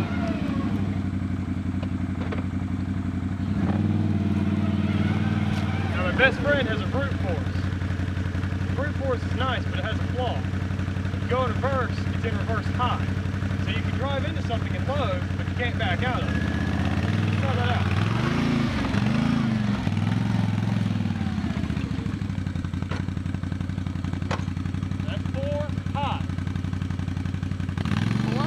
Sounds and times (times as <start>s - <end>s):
Outside, rural or natural: 0.0s - 28.4s
Vehicle: 0.0s - 28.4s
Speech: 6.0s - 7.6s, 11.2s - 16.3s, 17.4s - 17.9s, 25.0s - 26.3s.